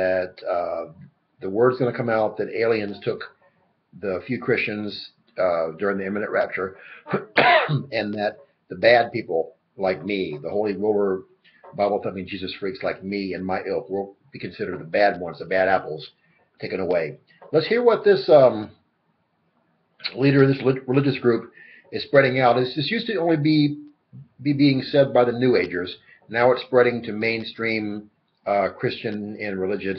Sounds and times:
Speech: 0.0s - 3.3s, 4.0s - 18.7s, 20.0s - 29.9s.

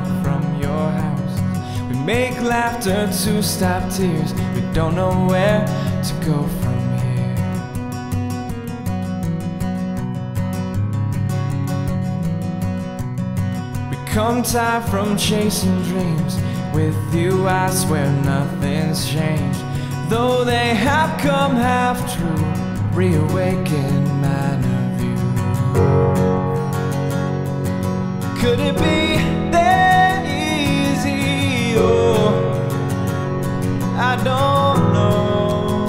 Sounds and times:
Music: 0.0s - 35.8s.

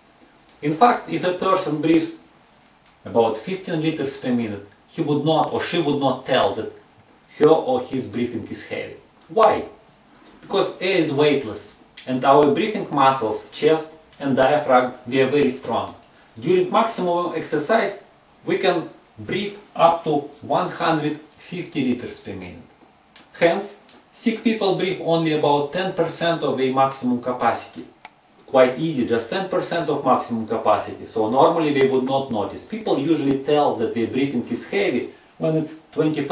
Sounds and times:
Speech: 0.6s - 2.3s, 3.0s - 22.7s, 23.3s - 36.3s.

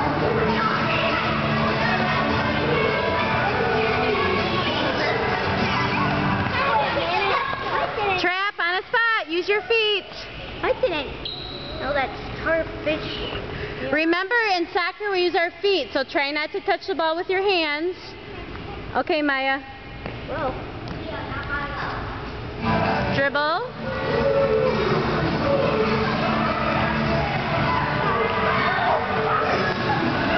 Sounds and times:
Music: 0.0s - 7.3s, 22.6s - 30.3s.

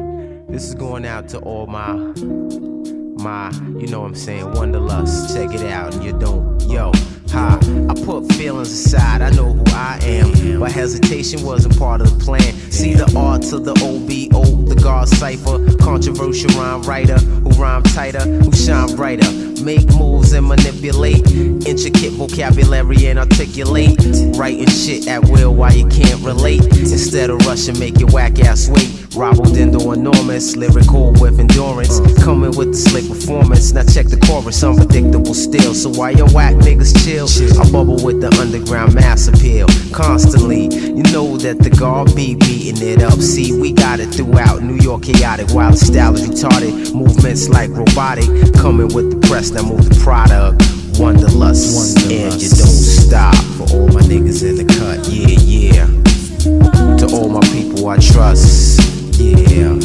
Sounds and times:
Rhythm and blues: 0.0s - 59.8s.

